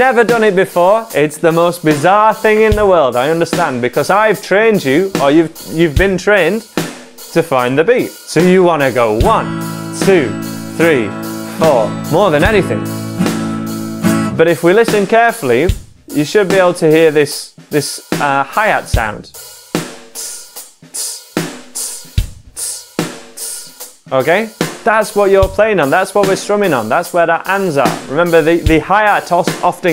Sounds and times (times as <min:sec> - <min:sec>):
Drum kit: 0:00.0 - 0:29.9
Bass drum: 0:02.4 - 0:03.8, 0:08.8 - 0:15.1, 0:15.7 - 0:16.1.